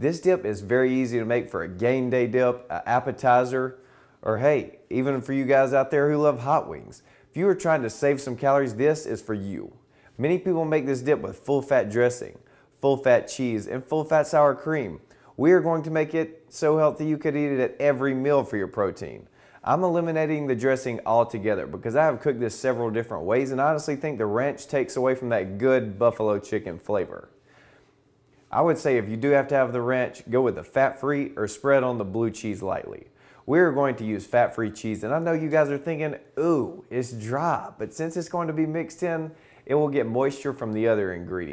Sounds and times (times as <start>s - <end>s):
Speech: 0.0s - 27.4s, 28.5s - 41.5s.